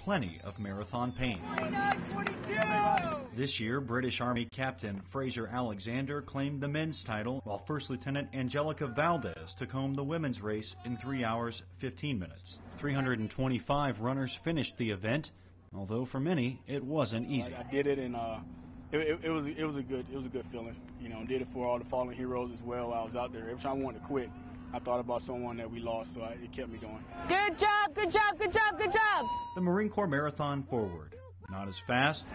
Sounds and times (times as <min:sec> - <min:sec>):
Outside, urban or manmade: 0:00.0 - 0:32.3
Speech: 0:03.4 - 0:18.4, 0:19.0 - 0:32.3.